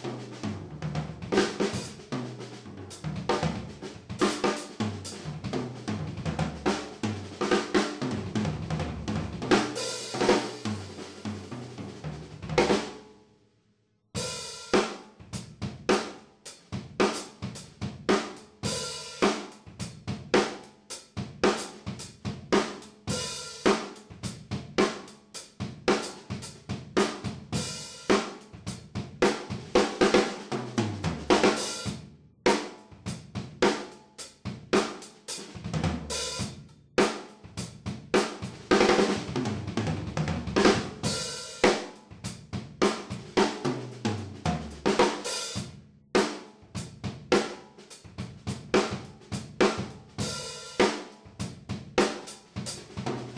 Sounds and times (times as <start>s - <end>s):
Drum: 0.0s - 13.0s, 14.2s - 53.3s.